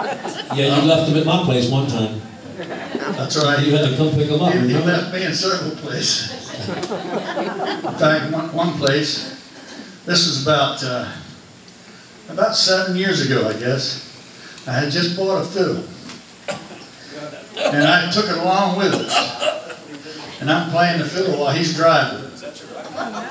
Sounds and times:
Speech: 0.4 - 2.3, 3.0 - 6.6, 7.9 - 9.4, 10.1 - 11.4, 12.3 - 14.1, 14.7 - 16.0, 17.1 - 23.3.

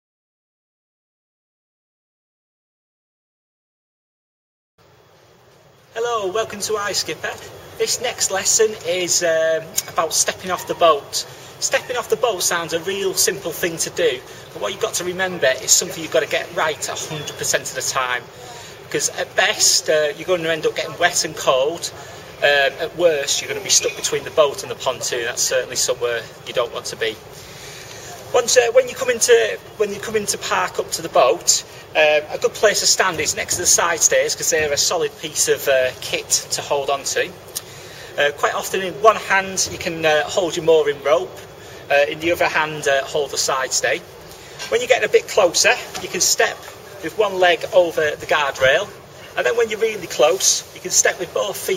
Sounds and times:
Speech: 5.9 - 27.2, 28.1 - 37.4, 38.2 - 51.7.

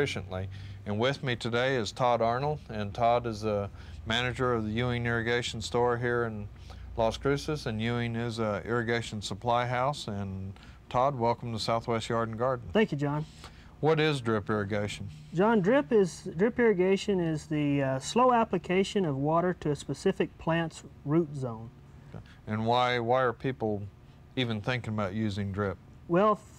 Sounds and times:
Speech: 0.0 - 13.2, 13.8 - 21.7, 22.5 - 26.5.

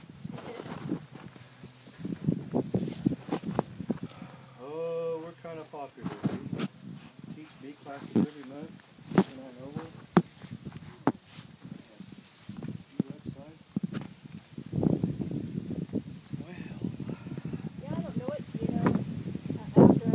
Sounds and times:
Cricket: 0.0 - 20.1.

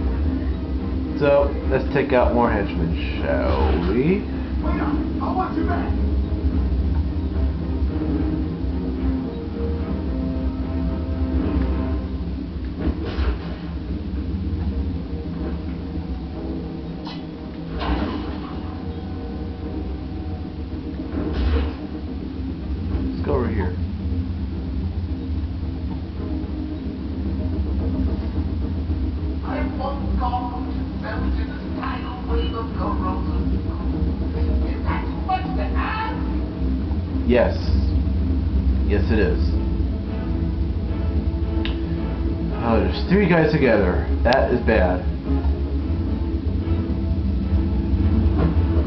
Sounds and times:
Music: 0.0 - 48.8.

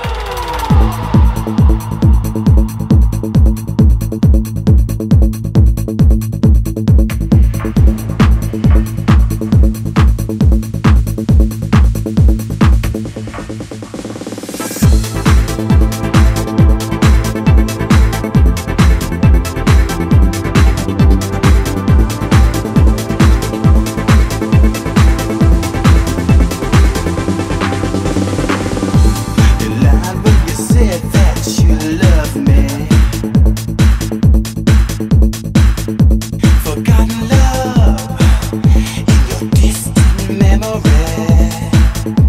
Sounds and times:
Music: 0.0 - 42.2.

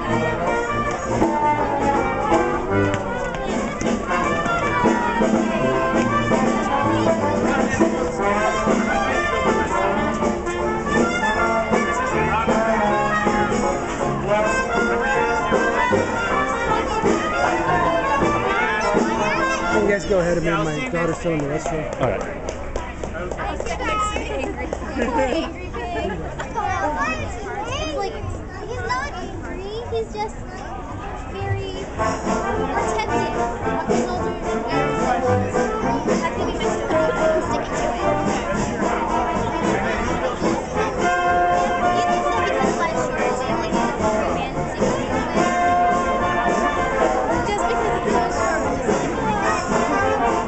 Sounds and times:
Music: 0.0 - 50.4
Child speech, kid speaking: 3.0 - 10.2, 14.4 - 21.0, 23.2 - 50.4.

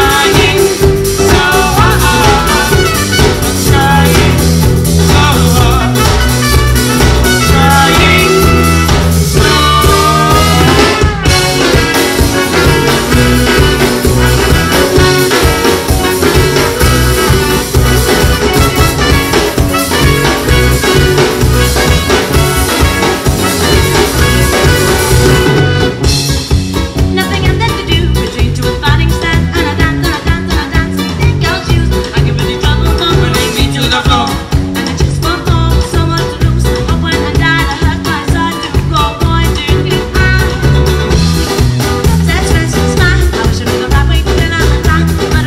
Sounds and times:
Singing: 0.0 - 3.0, 7.4 - 8.8, 9.4 - 11.0
Psychedelic rock: 0.0 - 45.4.

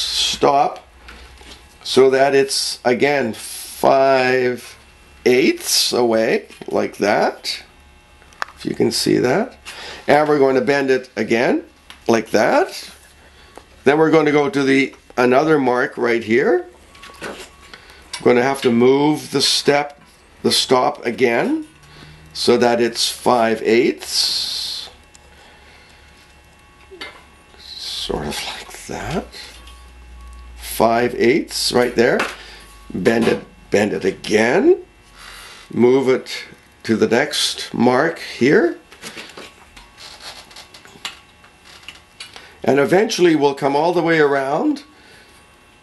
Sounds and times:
Speech: 0.0 - 0.9, 1.8 - 7.7, 8.6 - 13.0, 13.8 - 16.7, 18.2 - 21.7, 22.4 - 25.0, 27.0 - 29.6, 30.6 - 34.9, 35.7 - 38.9, 42.6 - 44.9.

